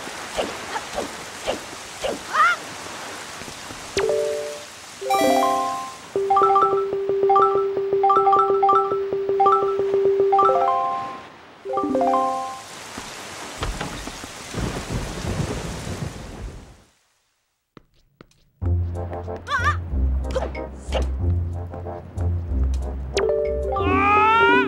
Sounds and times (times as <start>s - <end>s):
Rustling leaves: 0.0s - 6.2s, 11.0s - 16.9s
Music: 5.1s - 12.6s, 18.6s - 24.6s.